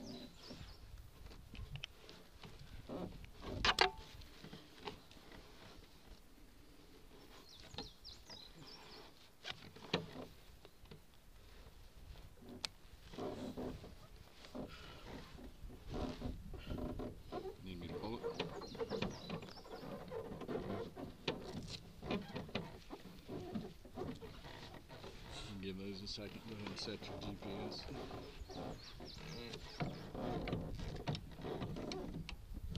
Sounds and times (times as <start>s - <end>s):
Speech: 17.6s - 18.4s, 25.5s - 28.0s.